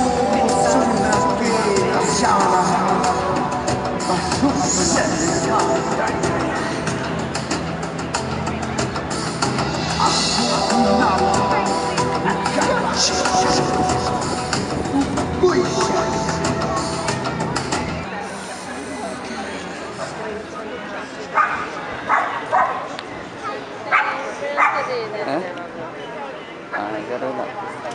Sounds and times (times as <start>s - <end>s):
Speech: 0.0s - 3.4s, 4.0s - 7.0s, 10.0s - 14.3s, 15.4s - 16.5s
Music: 0.0s - 18.1s.